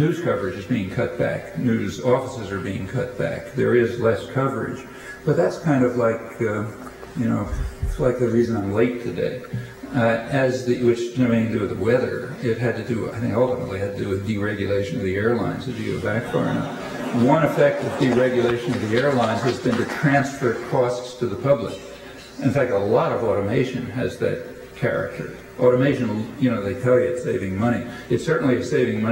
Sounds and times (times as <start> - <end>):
Inside, large room or hall: 0.0 - 29.1
Speech: 0.0 - 29.1.